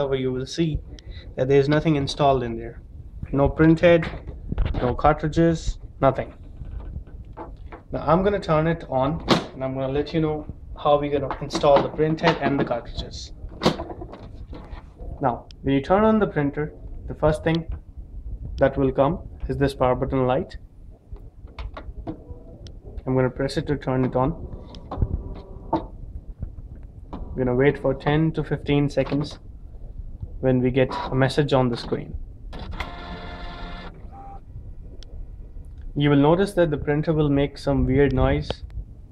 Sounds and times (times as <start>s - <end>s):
Speech: 0.0s - 0.8s, 1.4s - 4.2s, 4.8s - 6.4s, 7.9s - 13.4s, 15.2s - 17.7s, 18.6s - 20.6s, 23.0s - 24.4s, 27.4s - 29.4s, 30.4s - 32.2s, 36.0s - 38.7s.